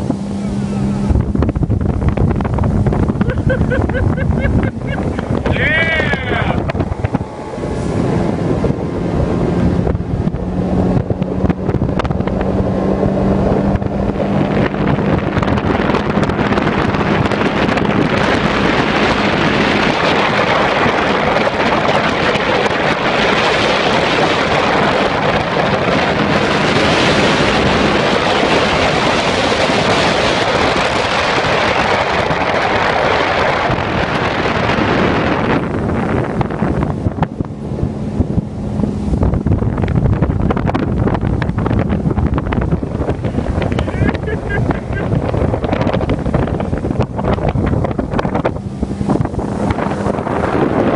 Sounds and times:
Boat, Water vehicle: 0:00.0 - 0:50.9.

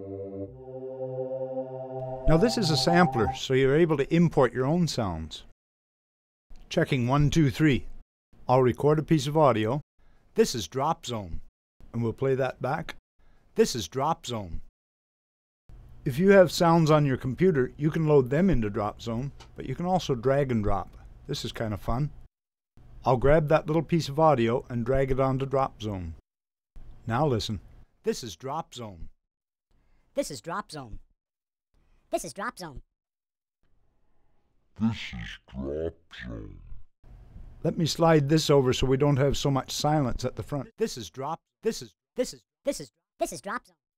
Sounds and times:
Speech: 0:02.3 - 0:05.5, 0:06.7 - 0:07.9, 0:08.5 - 0:09.8, 0:10.4 - 0:13.0, 0:13.6 - 0:14.7, 0:16.1 - 0:22.2, 0:23.0 - 0:26.2, 0:27.0 - 0:29.1, 0:30.2 - 0:31.0, 0:32.2 - 0:32.8, 0:34.8 - 0:36.8, 0:37.6 - 0:43.7.

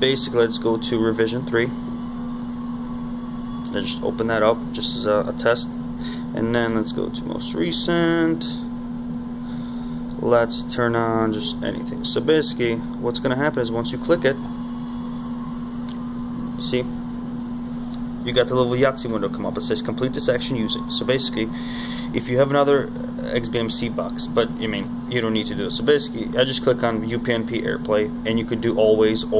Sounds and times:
Speech: 0:00.0 - 0:01.8, 0:03.7 - 0:05.7, 0:06.4 - 0:08.7, 0:10.2 - 0:14.4, 0:16.6 - 0:16.9, 0:18.2 - 0:29.3
Microwave oven: 0:00.0 - 0:29.3.

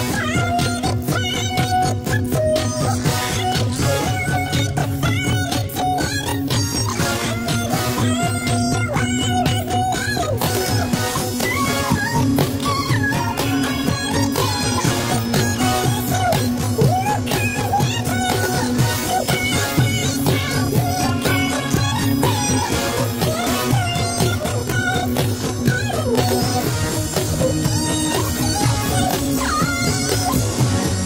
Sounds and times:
Music: 0:00.0 - 0:31.0.

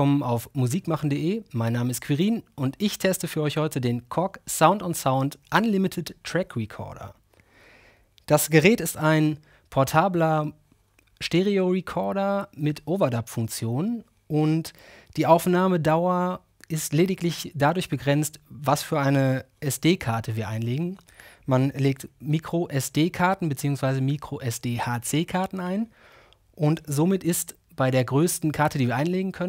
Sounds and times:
Speech: 0:00.0 - 0:07.2, 0:08.2 - 0:10.6, 0:11.2 - 0:25.9, 0:26.6 - 0:29.4.

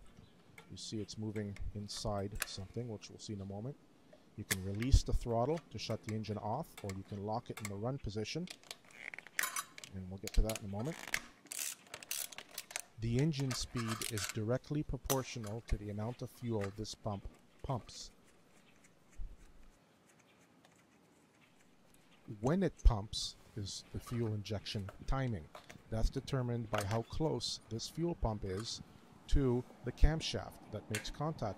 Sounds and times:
Speech: 0:00.7 - 0:03.8, 0:04.4 - 0:08.5, 0:09.9 - 0:11.0, 0:13.0 - 0:18.1, 0:22.3 - 0:31.5.

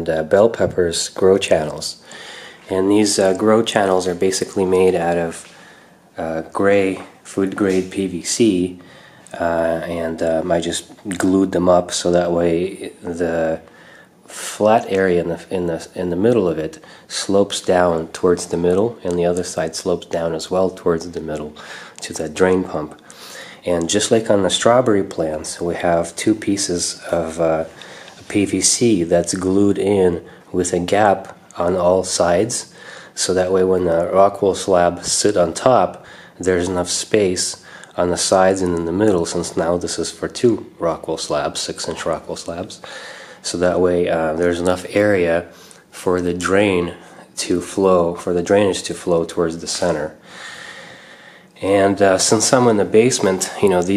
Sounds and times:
Speech: 0:00.0 - 0:02.0, 0:02.6 - 0:50.2, 0:51.6 - 0:53.9.

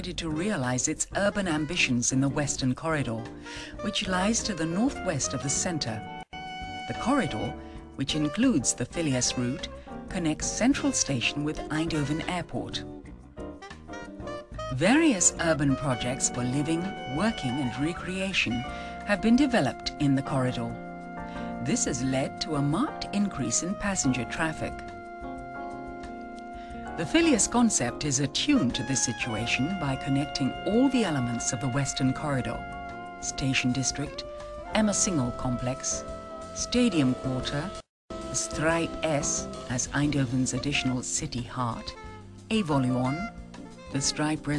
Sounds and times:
Speech: 0:00.0 - 0:06.0, 0:06.9 - 0:12.8, 0:14.8 - 0:20.8, 0:21.6 - 0:24.8, 0:27.0 - 0:32.6, 0:33.2 - 0:34.2, 0:34.8 - 0:36.0, 0:36.6 - 0:37.8, 0:38.4 - 0:43.3, 0:44.0 - 0:44.5
Music: 0:00.0 - 0:44.5.

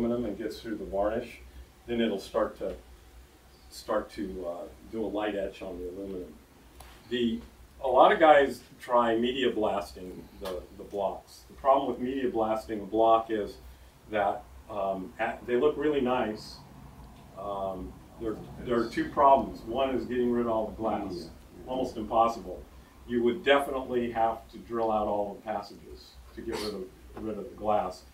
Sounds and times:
Speech: 0:00.0 - 0:02.8, 0:03.7 - 0:06.4, 0:07.0 - 0:16.6, 0:17.4 - 0:28.1.

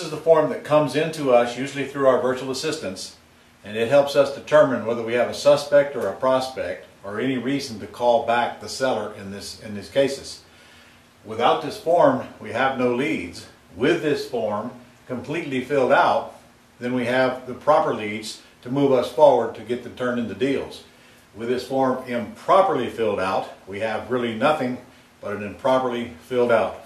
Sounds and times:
Speech: 0:00.0 - 0:10.5, 0:11.2 - 0:26.8.

